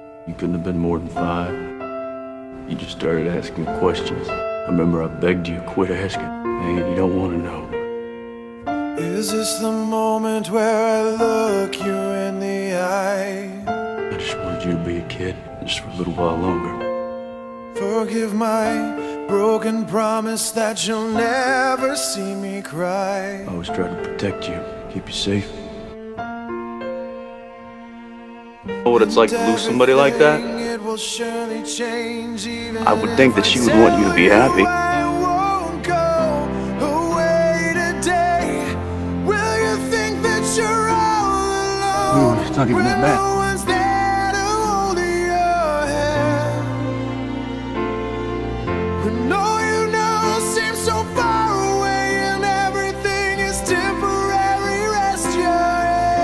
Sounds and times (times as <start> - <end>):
Music: 0.0 - 56.2
Speech: 0.3 - 1.7, 2.7 - 7.7, 14.2 - 16.8, 23.5 - 25.6, 28.8 - 30.7, 32.8 - 34.8, 42.0 - 43.4.